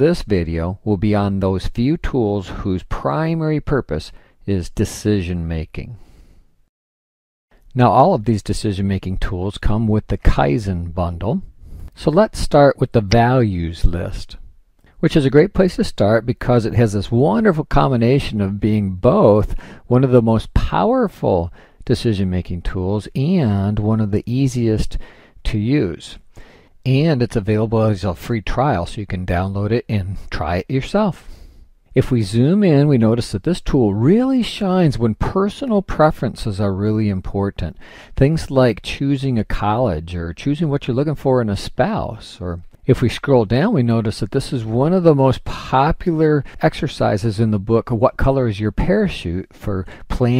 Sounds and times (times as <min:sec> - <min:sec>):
Speech: 0:00.0 - 0:06.0, 0:07.7 - 0:31.3, 0:31.9 - 0:50.3.